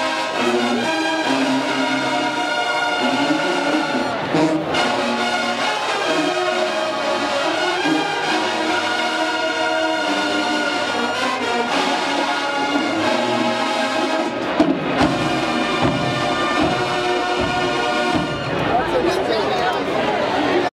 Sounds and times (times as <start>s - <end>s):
Music: 0.0s - 20.7s
Speech: 18.5s - 20.7s.